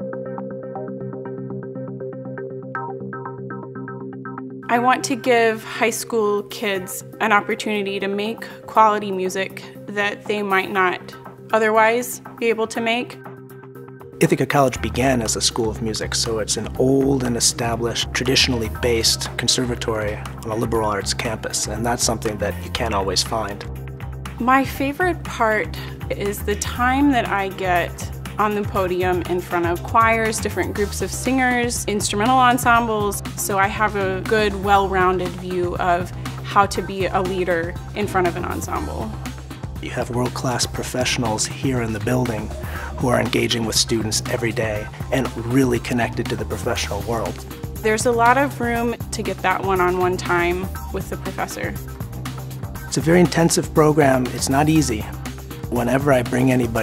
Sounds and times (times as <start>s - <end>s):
Music: 0.0s - 56.8s
Speech: 4.7s - 13.2s, 14.2s - 23.6s, 24.4s - 39.1s, 39.8s - 51.8s, 53.0s - 55.1s, 55.7s - 56.8s.